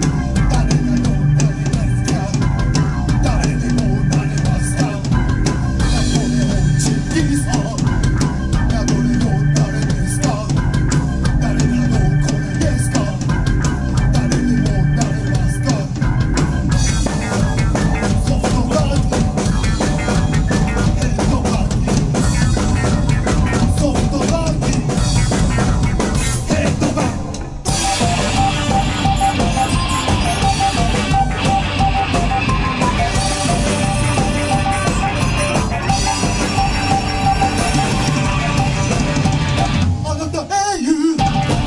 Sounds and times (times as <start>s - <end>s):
Musical instrument: 0.0s - 40.4s, 41.2s - 41.6s.